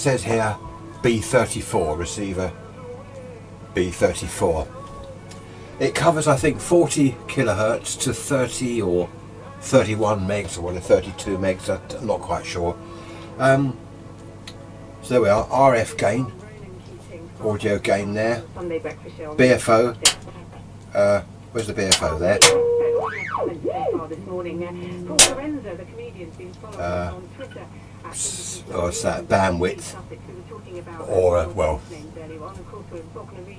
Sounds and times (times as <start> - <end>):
Speech: 0.0 - 2.6, 3.8 - 4.9, 5.8 - 12.8, 13.4 - 13.8, 15.0 - 22.5, 23.5 - 33.5
Radio: 18.6 - 20.6, 21.9 - 33.5.